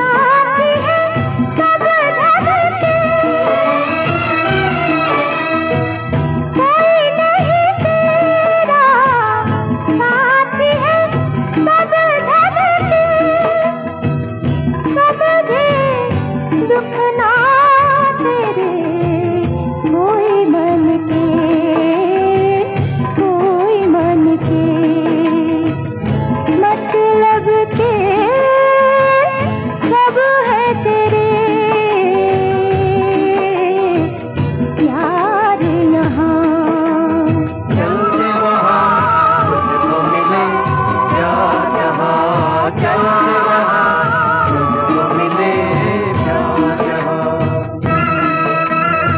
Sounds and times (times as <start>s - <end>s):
Song: 0.0s - 30.3s, 31.3s - 49.1s
Music of Bollywood: 0.0s - 49.1s.